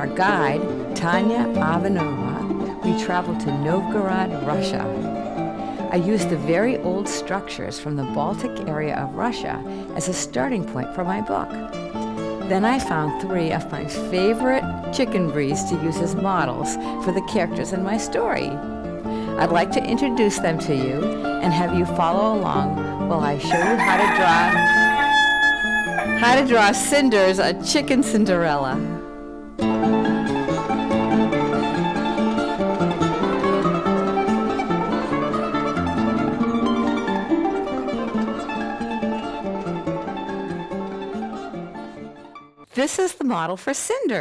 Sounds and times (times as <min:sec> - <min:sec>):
Speech: 0:00.0 - 0:04.9, 0:05.9 - 0:11.5, 0:12.5 - 0:18.6, 0:19.4 - 0:24.5, 0:26.2 - 0:29.0, 0:42.8 - 0:44.2
Music: 0:00.0 - 0:44.2
Chicken, rooster: 0:23.5 - 0:26.5.